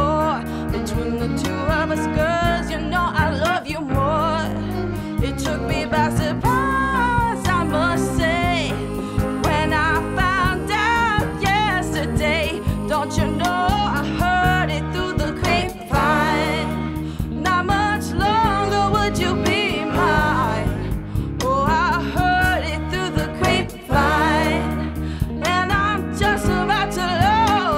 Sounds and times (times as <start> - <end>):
Blues: 0.0 - 27.7
Rhythm and blues: 0.0 - 27.7.